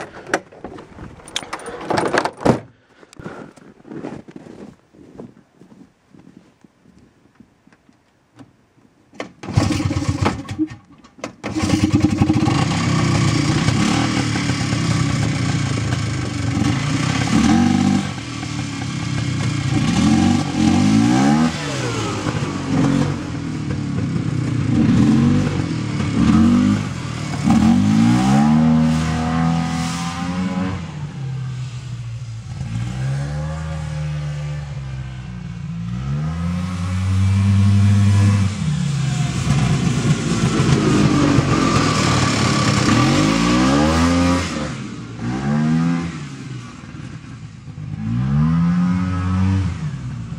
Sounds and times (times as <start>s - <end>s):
Outside, rural or natural: 0.0s - 50.3s
Car: 9.3s - 50.3s.